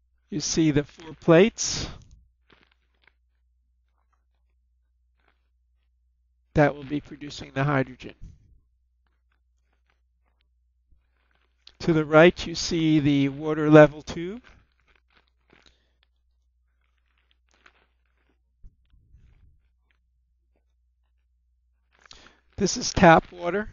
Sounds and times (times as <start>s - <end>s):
Speech: 0.3s - 2.0s, 6.6s - 8.3s, 11.7s - 14.5s, 22.6s - 23.7s.